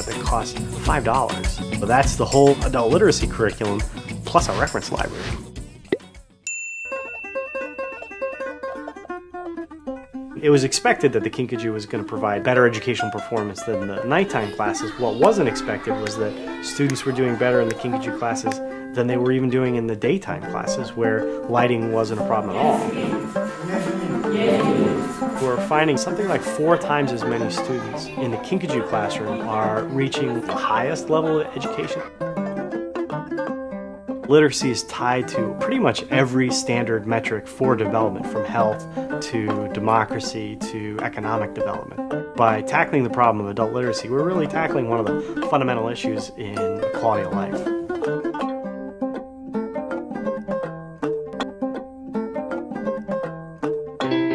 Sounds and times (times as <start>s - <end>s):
Speech: 0.0s - 5.1s, 10.4s - 32.1s, 34.3s - 47.7s
Music: 0.0s - 54.3s.